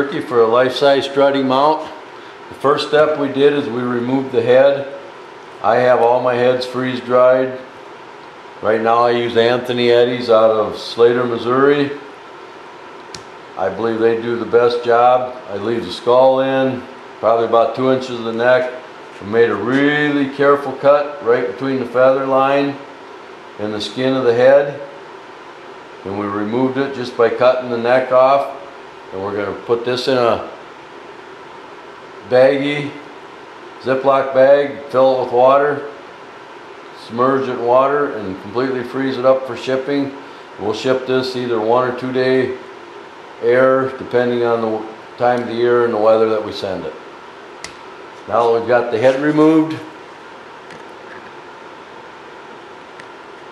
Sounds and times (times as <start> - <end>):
Speech: 0.0 - 5.0, 5.6 - 7.7, 8.6 - 12.0, 13.6 - 22.9, 23.6 - 24.9, 26.0 - 30.6, 32.2 - 33.0, 33.8 - 36.0, 37.0 - 42.6, 43.4 - 47.0, 48.2 - 49.9.